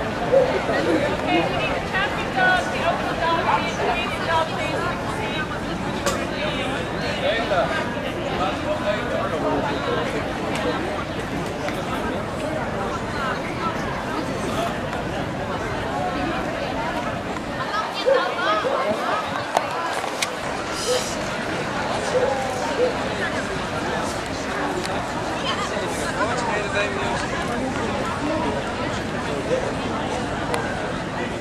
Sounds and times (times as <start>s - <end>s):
Speech: 0.0s - 31.4s.